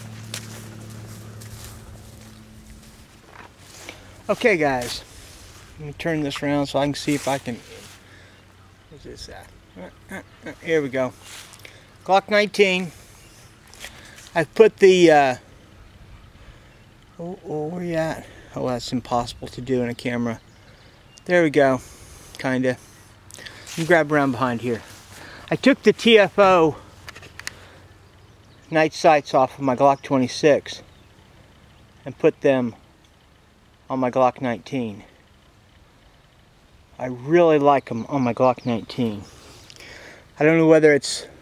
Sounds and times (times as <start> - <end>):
Speech: 4.3 - 5.1, 5.8 - 7.8, 8.9 - 11.2, 12.1 - 12.9, 14.4 - 15.4, 17.2 - 20.4, 21.2 - 21.8, 22.4 - 22.8, 23.8 - 24.9, 25.5 - 26.8, 28.7 - 30.9, 32.0 - 32.8, 33.9 - 35.1, 37.0 - 39.3, 40.4 - 41.4.